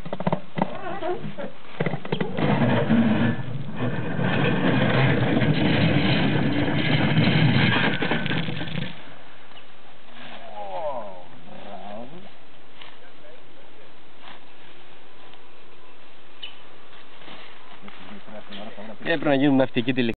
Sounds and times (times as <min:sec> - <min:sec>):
Speech: 0:18.0 - 0:20.1.